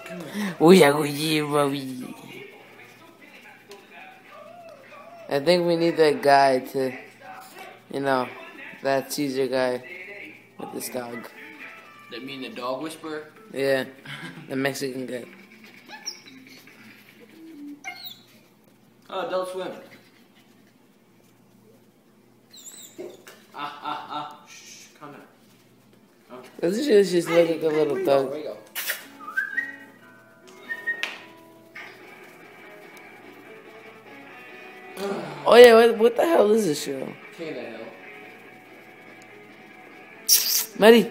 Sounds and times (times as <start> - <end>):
Inside, small room: 0.0 - 41.1
Dog: 15.4 - 18.5, 22.5 - 23.4.